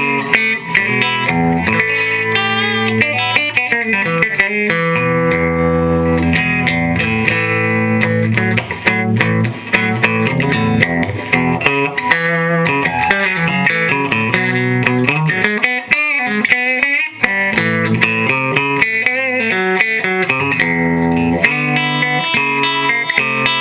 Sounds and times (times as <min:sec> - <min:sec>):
Strum: 0:00.0 - 0:23.6.